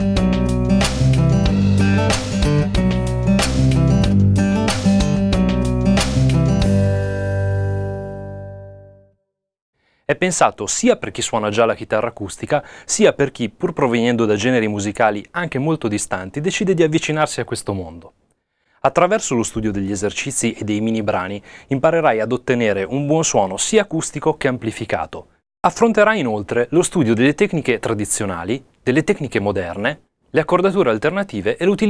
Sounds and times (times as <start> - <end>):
Acoustic guitar: 0.0 - 8.6
Strum: 0.0 - 8.9
Speech: 10.1 - 18.2, 18.8 - 31.9.